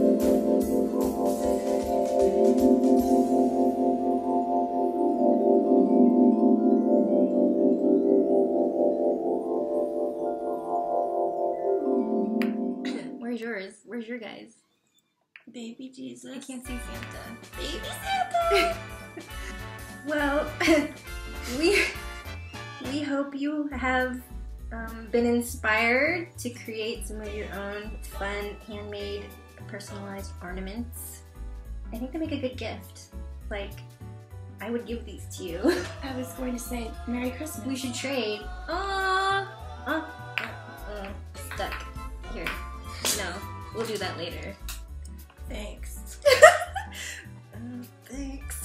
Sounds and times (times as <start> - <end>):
Marimba, xylophone: 0.0 - 13.2
Vibraphone: 0.0 - 13.2
Speech: 12.9 - 14.6, 15.4 - 18.8, 22.8 - 31.2, 31.9 - 33.8, 34.6 - 40.1, 40.8 - 44.6, 47.6 - 48.6.